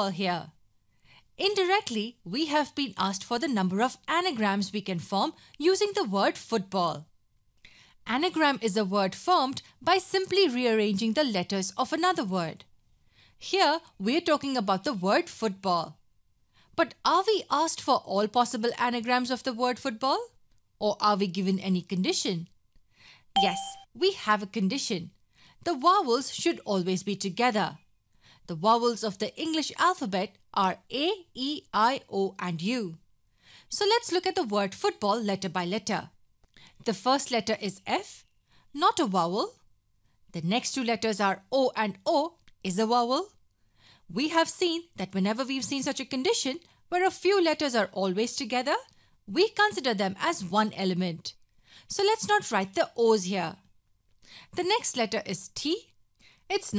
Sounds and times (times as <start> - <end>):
Speech: 0.0 - 0.6, 1.4 - 7.1, 8.1 - 12.7, 13.4 - 16.0, 16.8 - 22.5, 23.4 - 27.8, 28.5 - 33.0, 33.7 - 36.2, 36.8 - 38.2, 38.8 - 39.6, 40.4 - 43.4, 44.1 - 53.6, 54.6 - 55.9, 56.5 - 56.7.